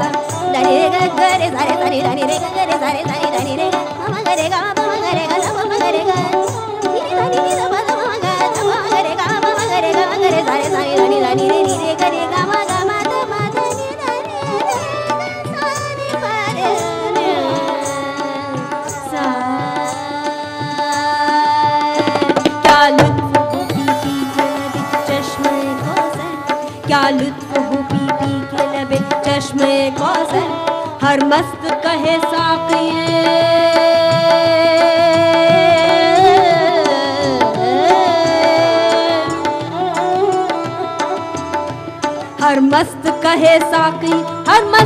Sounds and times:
Carnatic music: 0:00.0 - 0:44.8
Singing: 0:00.0 - 0:44.8.

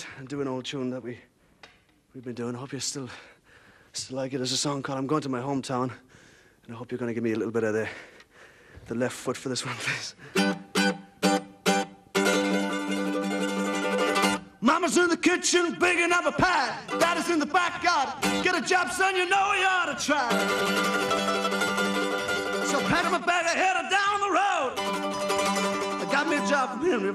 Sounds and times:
Speech: 0:00.0 - 0:01.3, 0:02.2 - 0:03.3, 0:04.0 - 0:06.0, 0:06.7 - 0:08.0, 0:08.9 - 0:10.2, 0:14.6 - 0:20.3, 0:22.7 - 0:24.8, 0:26.0 - 0:27.1
Music: 0:10.3 - 0:14.5, 0:16.9 - 0:17.3, 0:18.2 - 0:18.6, 0:20.3 - 0:23.3, 0:24.8 - 0:27.1.

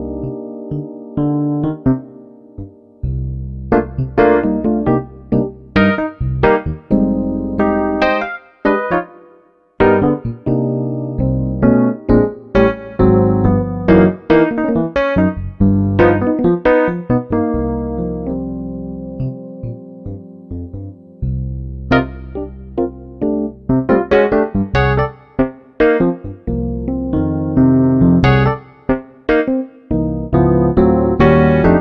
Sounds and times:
Electric piano: 0:00.0 - 0:31.8.

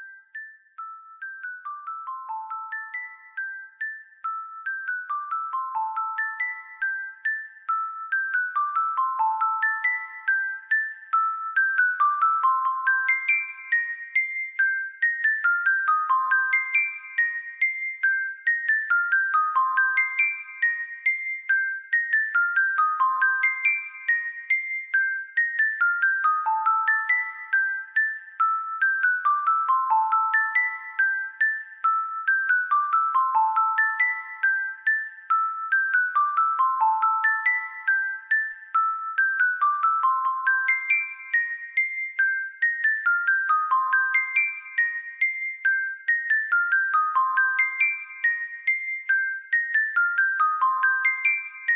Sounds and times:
Music: 0:00.0 - 0:51.7.

